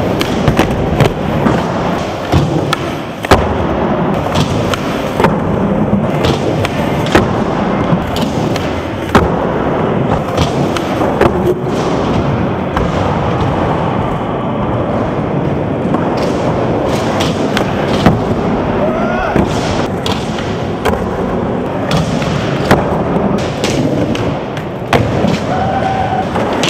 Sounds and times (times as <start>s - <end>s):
Skateboard: 0.0s - 26.7s.